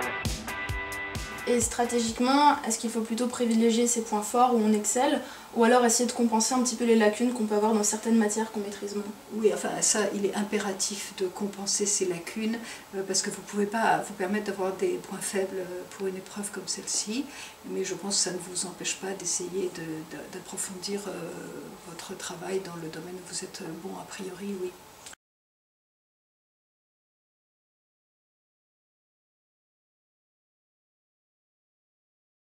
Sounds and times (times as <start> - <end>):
Speech: 1.5 - 24.8.